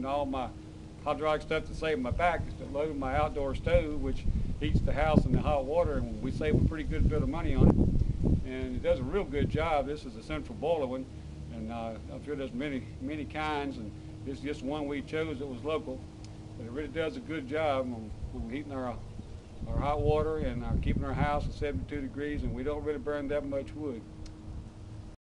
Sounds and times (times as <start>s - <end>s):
Speech: 0.0s - 7.7s, 8.4s - 16.0s, 16.6s - 19.0s, 19.6s - 24.1s.